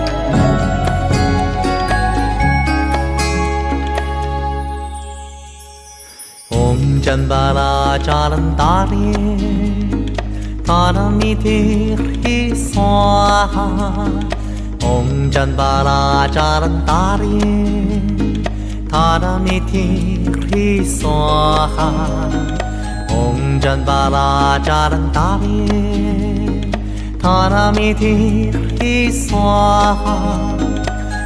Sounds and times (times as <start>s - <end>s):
Music: 0.0s - 31.2s.